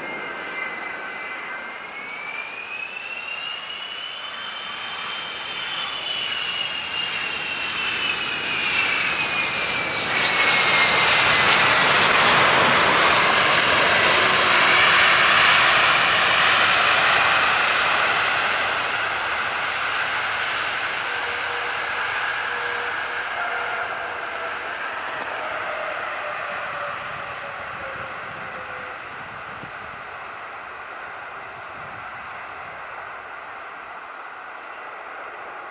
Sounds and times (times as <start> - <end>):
Aircraft engine: 0.0 - 35.7
Fixed-wing aircraft, airplane: 0.0 - 35.7
Outside, rural or natural: 0.0 - 35.7.